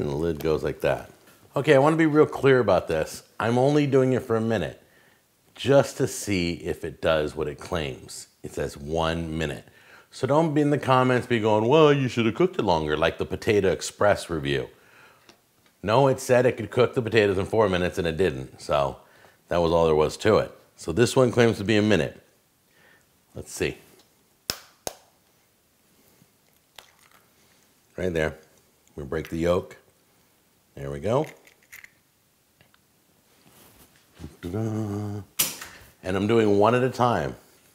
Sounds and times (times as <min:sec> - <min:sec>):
Speech: 0:00.0 - 0:04.8, 0:05.6 - 0:14.8, 0:15.8 - 0:22.3, 0:23.4 - 0:23.9, 0:28.0 - 0:29.9, 0:30.8 - 0:31.4, 0:34.2 - 0:35.3, 0:36.0 - 0:37.4
Inside, small room: 0:00.0 - 0:37.7.